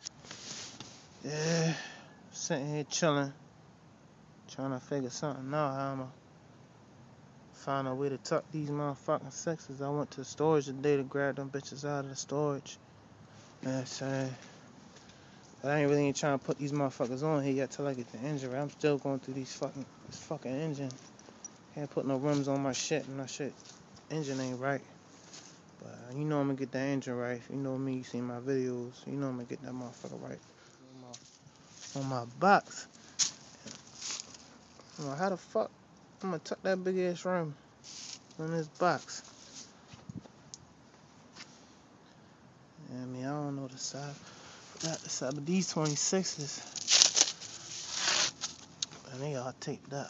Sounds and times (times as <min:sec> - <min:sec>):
Speech: 0:01.2 - 0:03.4, 0:04.5 - 0:06.2, 0:07.6 - 0:12.8, 0:13.6 - 0:14.5, 0:15.6 - 0:21.0, 0:21.8 - 0:24.9, 0:25.8 - 0:31.2, 0:31.9 - 0:32.9, 0:34.9 - 0:37.6, 0:38.4 - 0:39.3, 0:42.8 - 0:44.2, 0:44.8 - 0:46.7, 0:49.0 - 0:50.0.